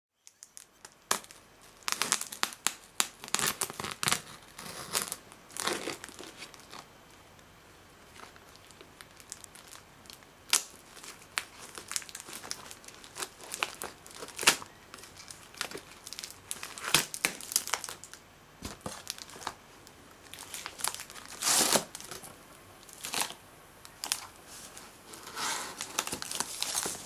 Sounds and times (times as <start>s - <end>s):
Inside, small room: 0.1s - 27.0s
Crumpling, crinkling: 0.2s - 7.4s, 8.0s - 27.0s.